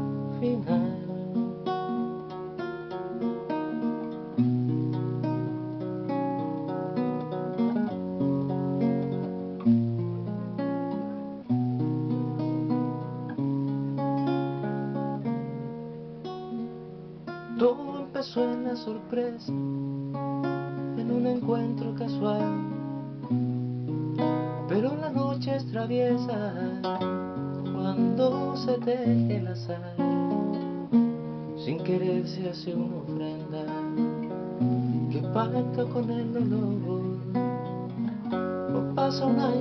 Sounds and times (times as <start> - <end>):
Acoustic guitar: 0.0 - 39.6.